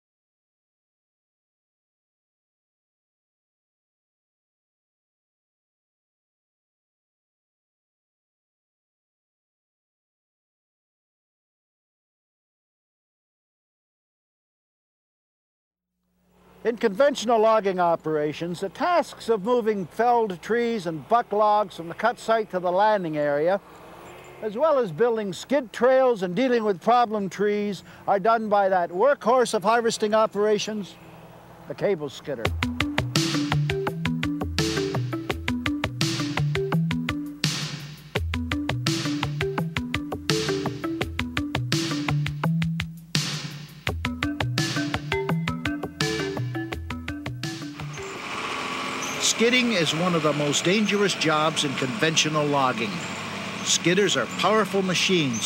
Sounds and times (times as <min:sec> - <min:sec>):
Speech: 0:16.6 - 0:23.6, 0:24.4 - 0:31.0, 0:31.7 - 0:32.5, 0:49.2 - 0:53.0, 0:53.7 - 0:55.4.